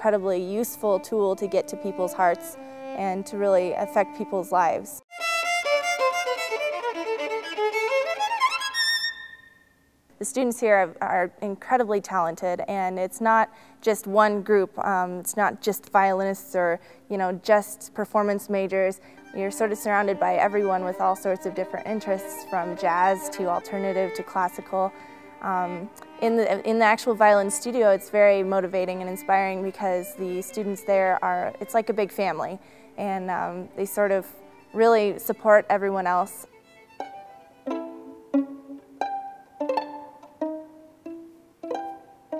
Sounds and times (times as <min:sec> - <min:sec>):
Pizzicato: 0:37.0 - 0:42.3.